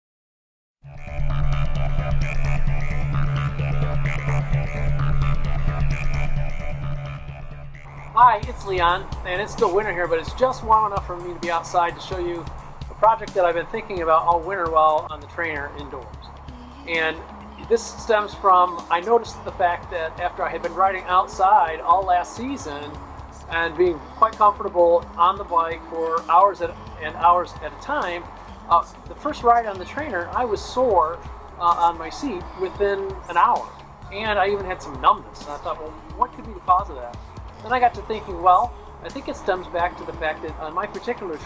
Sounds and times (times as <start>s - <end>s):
Music: 0.8s - 41.4s
Speech: 8.2s - 12.4s, 13.0s - 16.2s, 16.9s - 41.4s.